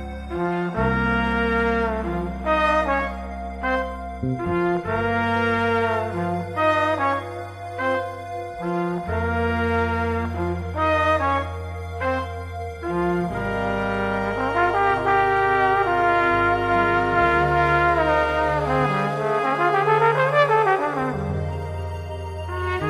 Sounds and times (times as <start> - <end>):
Jazz: 0.0 - 22.8
Trombone: 0.0 - 22.8
Trumpet: 0.0 - 22.8.